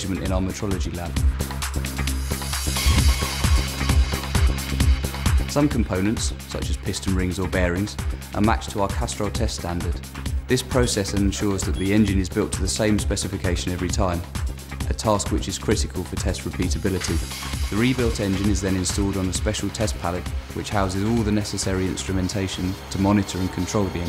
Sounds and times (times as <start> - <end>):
Speech: 0.0 - 1.2, 5.5 - 14.3, 14.9 - 24.0
Music: 0.0 - 24.0.